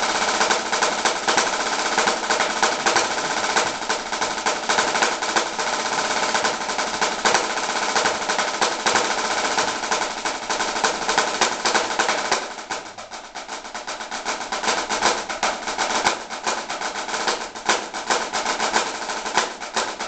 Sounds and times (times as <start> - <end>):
Drum roll: 0.0 - 20.0.